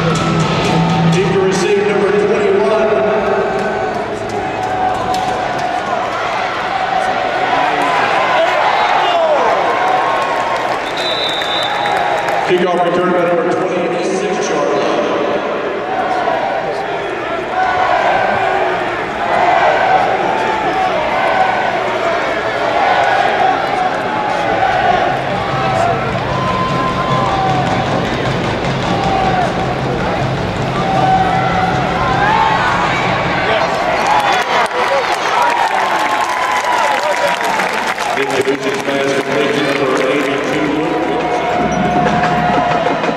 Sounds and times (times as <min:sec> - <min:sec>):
Music: 0:00.0 - 0:05.8, 0:24.2 - 0:34.7, 0:38.2 - 0:43.1.